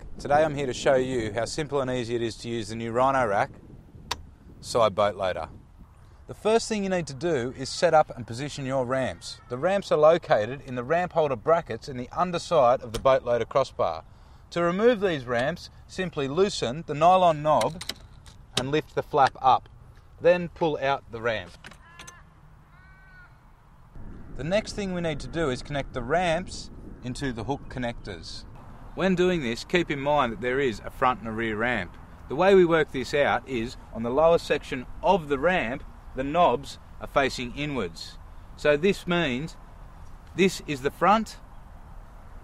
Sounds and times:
Speech: 0.2s - 3.5s, 4.6s - 5.5s, 6.3s - 17.8s, 18.5s - 21.6s, 24.4s - 39.6s, 40.4s - 41.4s.

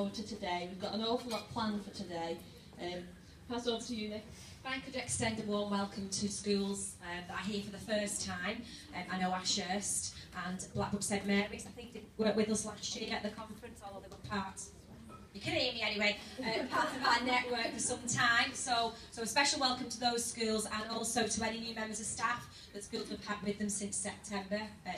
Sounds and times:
Speech: 0.0s - 14.8s, 15.4s - 24.9s.

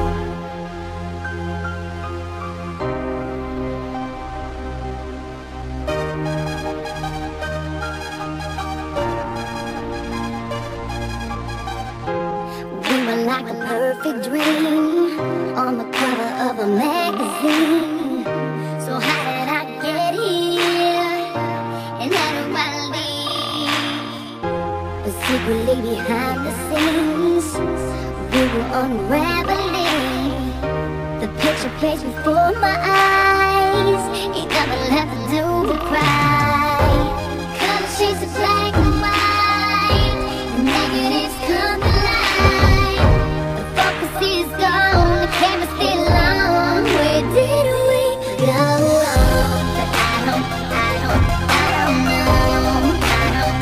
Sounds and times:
Background music: 0.0s - 53.6s
Soul music: 0.0s - 53.6s.

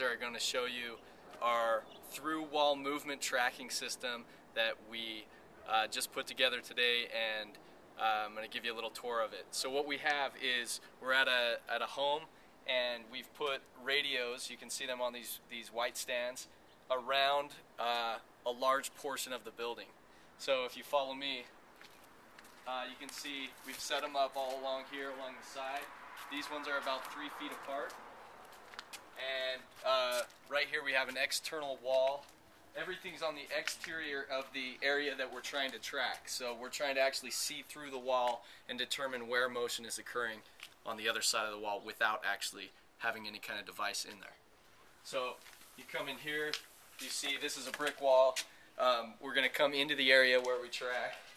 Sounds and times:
Speech: 0.0s - 21.5s, 22.7s - 28.0s, 29.2s - 44.4s, 45.0s - 51.3s.

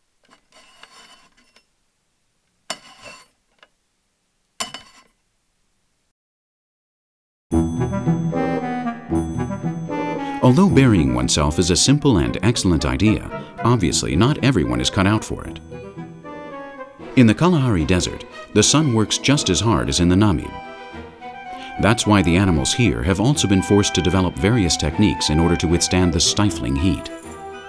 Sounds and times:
Music: 7.5s - 27.6s.

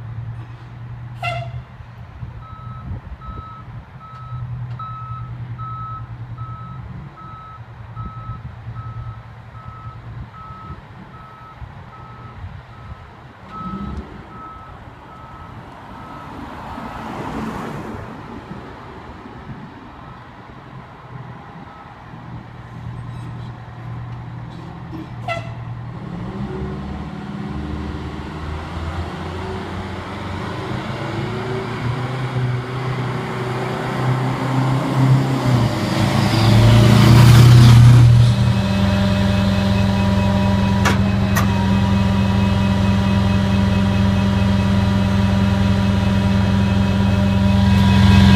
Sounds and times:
Car: 0.0s - 48.3s.

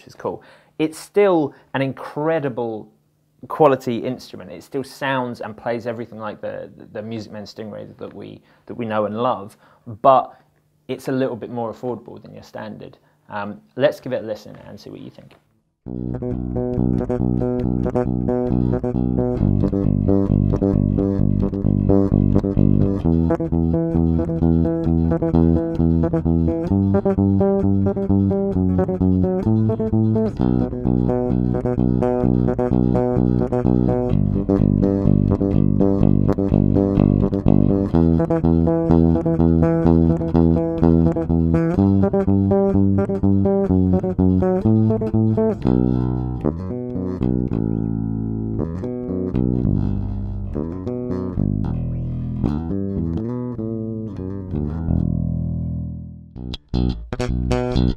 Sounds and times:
Bass guitar: 15.8s - 57.9s.

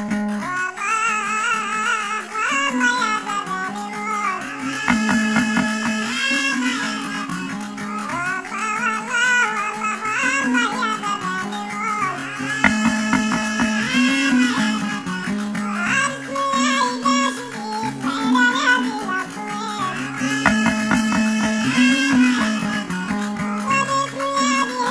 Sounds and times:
Music: 0.0s - 24.9s.

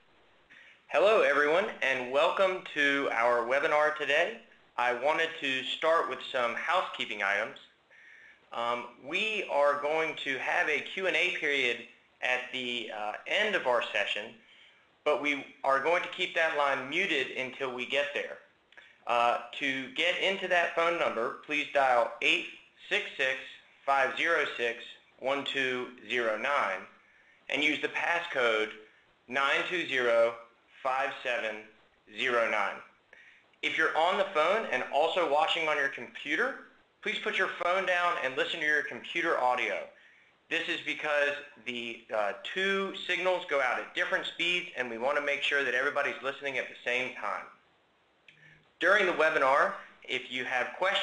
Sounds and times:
Speech: 0.9s - 7.8s, 8.5s - 14.4s, 15.1s - 33.0s, 33.6s - 47.6s, 48.8s - 51.0s.

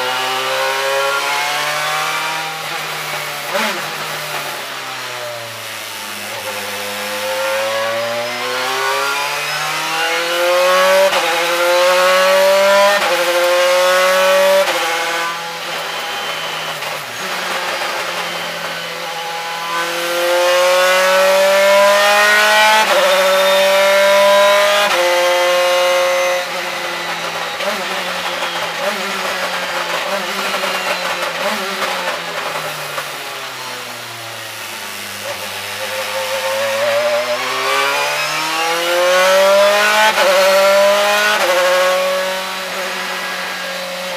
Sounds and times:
Car: 0.0s - 44.1s.

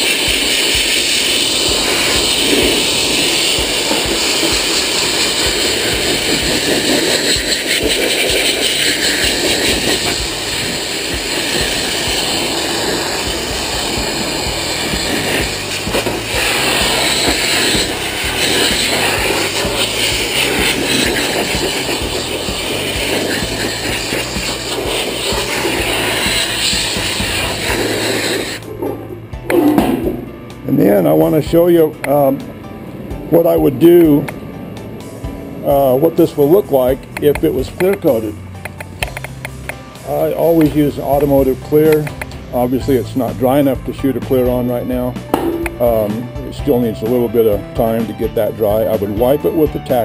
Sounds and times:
Music: 0.0s - 50.0s.

